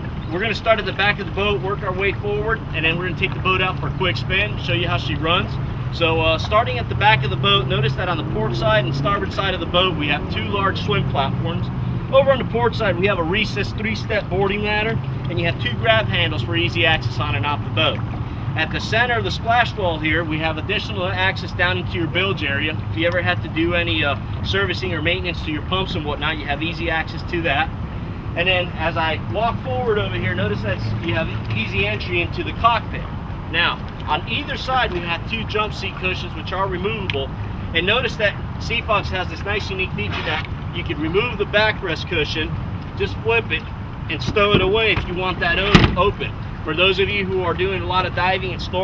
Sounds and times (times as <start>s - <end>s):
Motorboat, speedboat: 0.0s - 48.8s
Speech: 0.3s - 18.0s, 18.6s - 27.7s, 28.4s - 48.8s.